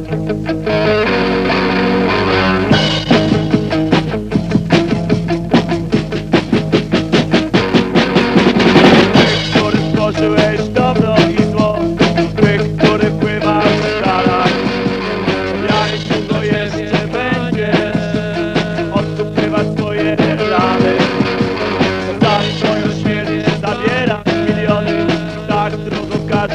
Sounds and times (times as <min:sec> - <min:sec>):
Music: 0:00.0 - 0:26.5.